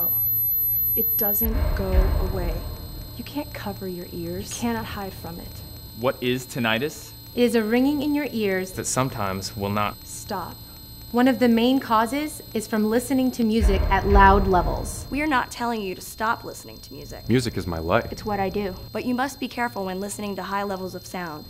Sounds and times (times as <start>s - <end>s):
Speech: 3.2s - 5.4s, 11.2s - 21.4s.